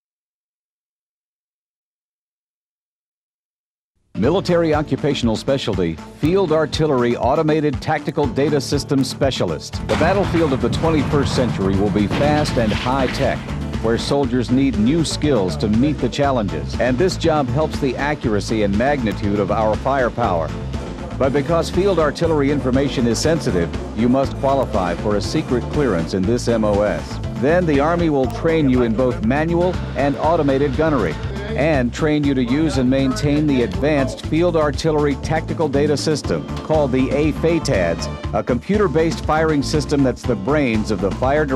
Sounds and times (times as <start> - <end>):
Music: 4.0 - 41.5
Speech: 4.2 - 20.5, 21.2 - 41.5.